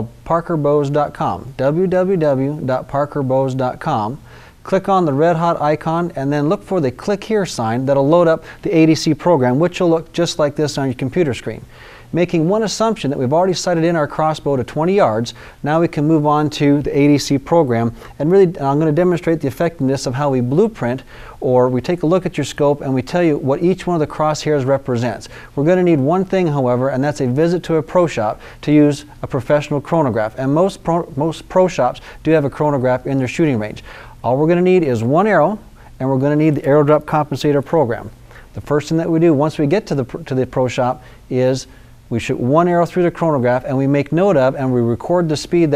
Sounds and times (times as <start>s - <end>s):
Speech: 0.0s - 45.7s.